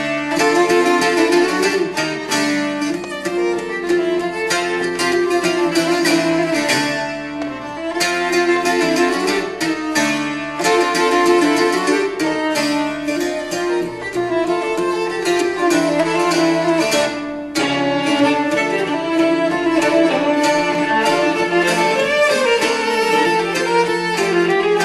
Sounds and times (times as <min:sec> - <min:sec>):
Classical music: 0:00.0 - 0:24.8
Guitar: 0:00.0 - 0:24.8
String section: 0:00.0 - 0:24.8
Violin, fiddle: 0:00.0 - 0:24.8.